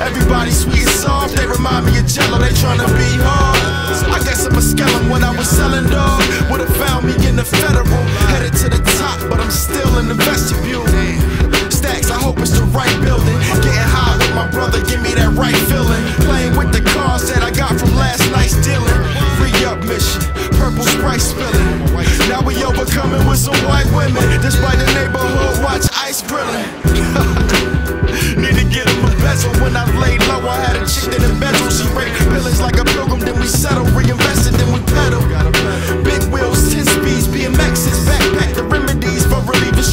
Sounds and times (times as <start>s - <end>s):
Background music: 0.0s - 39.9s.